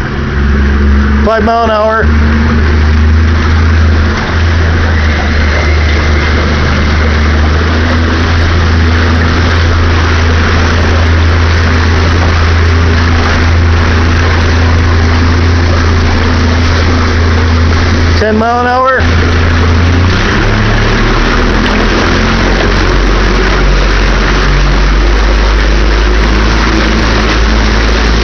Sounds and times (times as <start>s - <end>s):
Motorboat, speedboat: 0.0s - 28.2s.